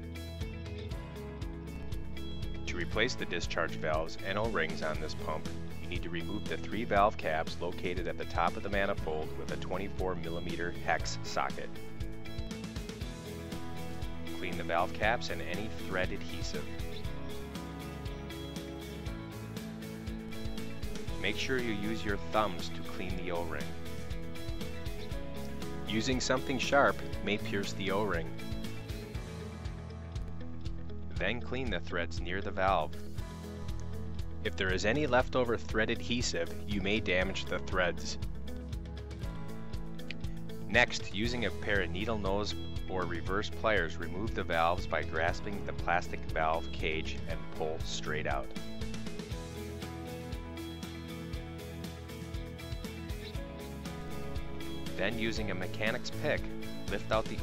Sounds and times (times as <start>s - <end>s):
Music: 0.0s - 57.4s
Speech: 2.7s - 11.8s, 14.4s - 17.0s, 21.2s - 23.8s, 25.9s - 28.3s, 31.2s - 32.9s, 34.5s - 38.2s, 40.7s - 48.6s, 55.0s - 57.4s.